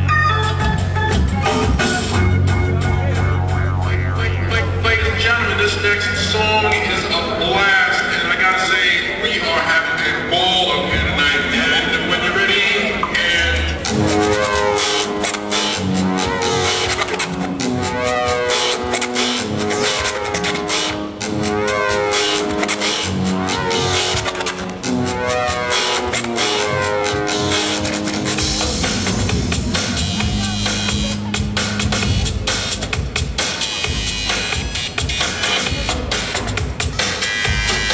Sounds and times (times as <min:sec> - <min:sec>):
Didgeridoo: 0:00.0 - 0:07.4, 0:13.1 - 0:37.9.